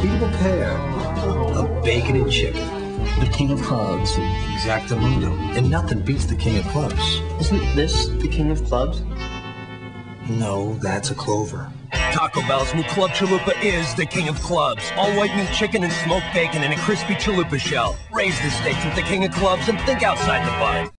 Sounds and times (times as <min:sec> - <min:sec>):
Speech: 0:00.0 - 0:02.6, 0:03.2 - 0:09.0, 0:10.3 - 0:20.9
Music: 0:00.0 - 0:20.9.